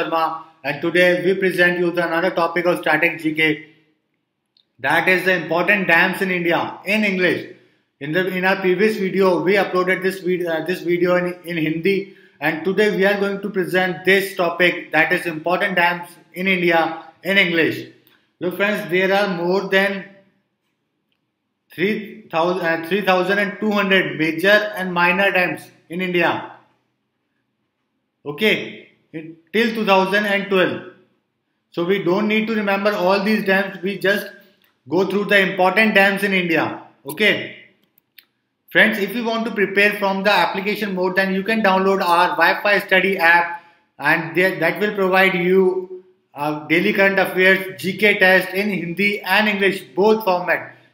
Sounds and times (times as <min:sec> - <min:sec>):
Speech: 0:00.0 - 0:03.6, 0:04.8 - 0:07.4, 0:08.0 - 0:17.8, 0:18.4 - 0:20.0, 0:21.7 - 0:26.5, 0:28.3 - 0:30.8, 0:31.8 - 0:34.3, 0:34.9 - 0:37.6, 0:38.7 - 0:50.7.